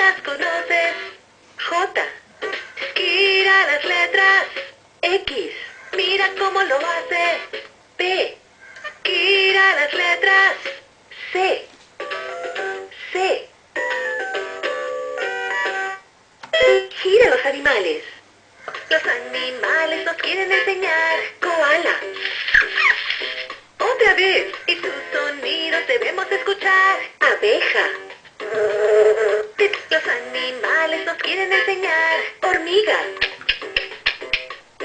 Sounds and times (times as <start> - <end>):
Music: 0.0 - 1.2, 2.3 - 4.8, 5.5 - 7.8, 8.8 - 10.9, 12.0 - 13.1, 13.8 - 17.0, 18.7 - 34.8
Speech: 1.6 - 2.2, 5.0 - 6.7, 8.0 - 8.4, 11.2 - 11.8, 13.0 - 13.5, 16.9 - 18.2, 23.8 - 24.5, 27.2 - 28.0, 32.4 - 33.2.